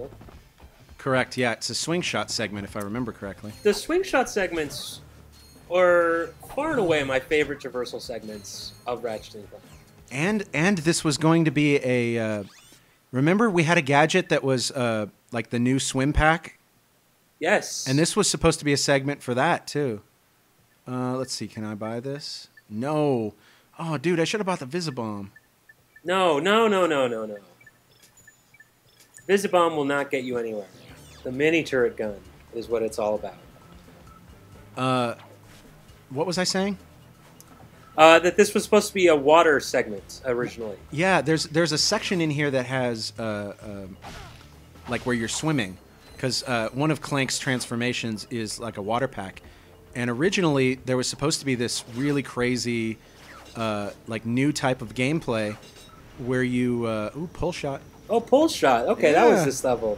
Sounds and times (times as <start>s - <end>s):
Speech: 1.0s - 5.0s, 5.7s - 12.5s, 17.4s - 20.0s, 20.9s - 25.3s, 29.3s - 30.7s, 38.0s - 44.0s, 44.9s - 49.4s, 56.2s - 59.9s.